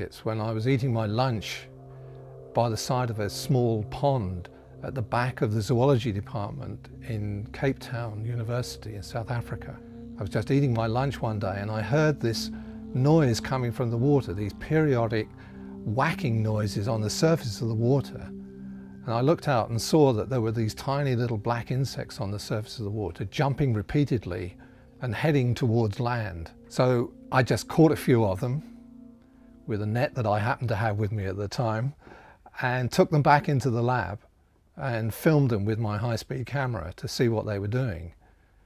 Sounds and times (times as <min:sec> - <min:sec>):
Speech: 0:00.0 - 0:01.7, 0:02.6 - 0:15.3, 0:15.9 - 0:18.3, 0:19.0 - 0:28.7, 0:29.7 - 0:38.2.